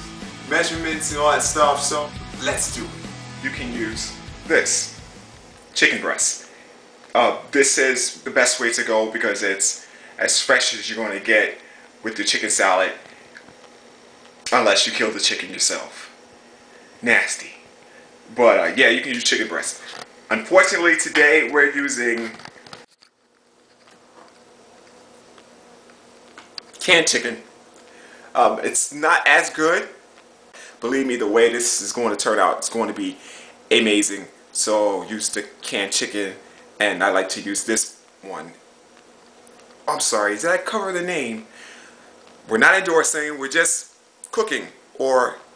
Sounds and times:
Speech: 0:00.5 - 0:05.0, 0:05.8 - 0:06.5, 0:07.1 - 0:13.0, 0:14.5 - 0:16.2, 0:17.0 - 0:17.7, 0:18.3 - 0:22.4, 0:26.8 - 0:27.5, 0:28.4 - 0:30.0, 0:30.8 - 0:38.6, 0:39.8 - 0:41.5, 0:42.5 - 0:45.5.

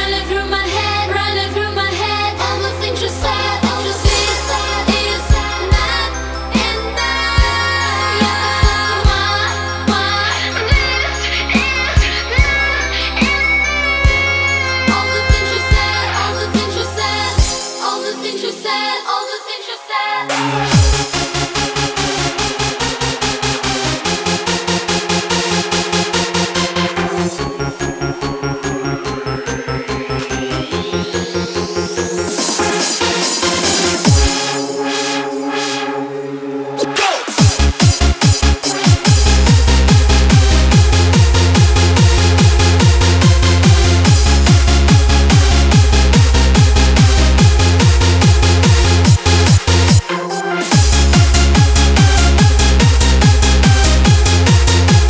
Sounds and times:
Music: 0:00.0 - 0:55.1.

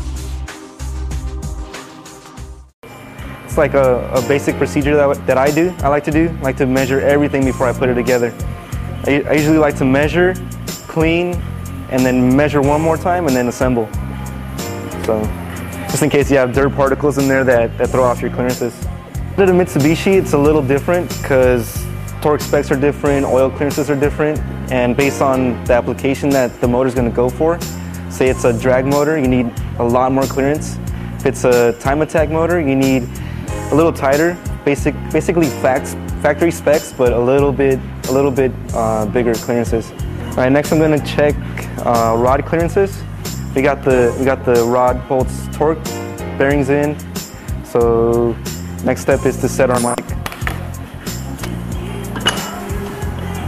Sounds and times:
Music: 0:00.0 - 0:53.4
Speech: 0:03.5 - 0:08.4, 0:09.0 - 0:13.9, 0:15.0 - 0:18.8, 0:19.4 - 0:33.1, 0:33.7 - 0:43.0, 0:43.6 - 0:47.0, 0:47.7 - 0:50.1.

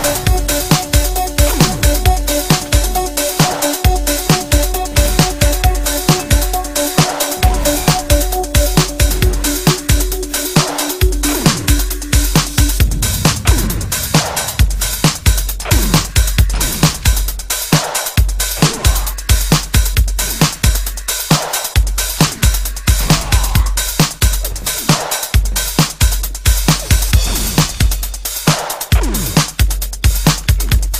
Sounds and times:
Drum and bass: 0:00.0 - 0:30.9.

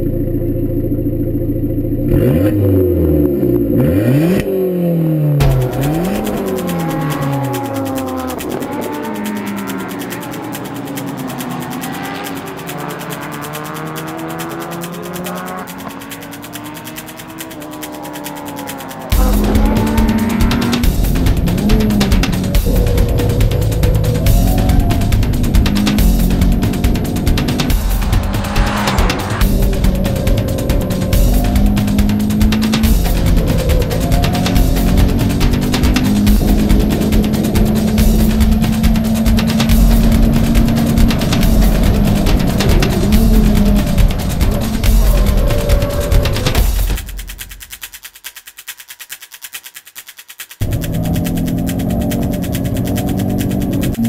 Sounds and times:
Music: 0:05.4 - 0:48.9.

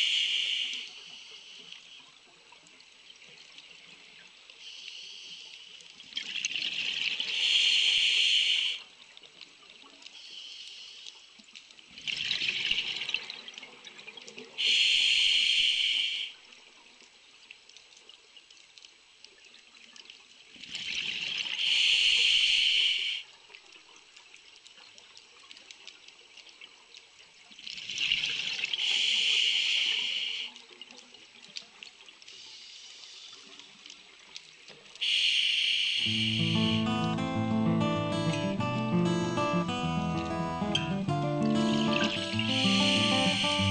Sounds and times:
Pour: 0:05.8 - 0:07.4, 0:11.4 - 0:14.6, 0:16.5 - 0:21.6, 0:23.3 - 0:28.9.

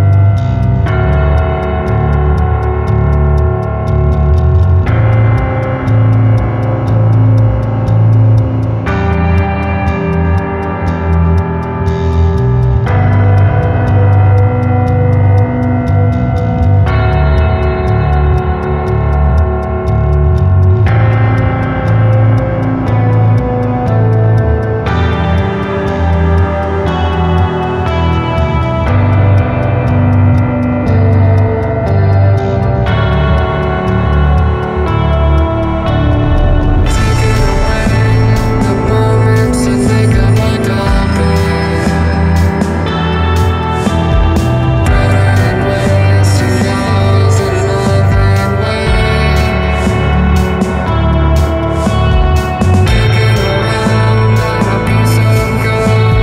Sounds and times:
Guitar: 0:00.0 - 0:56.2
Piano: 0:00.0 - 0:56.2.

